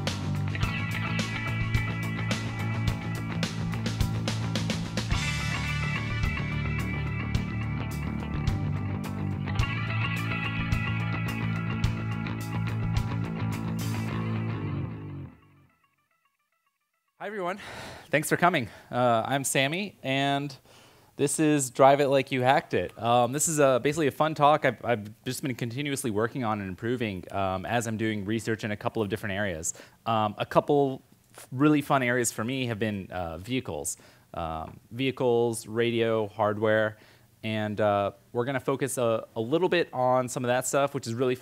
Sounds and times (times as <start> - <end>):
Speech: 17.2 - 20.6, 21.2 - 41.4.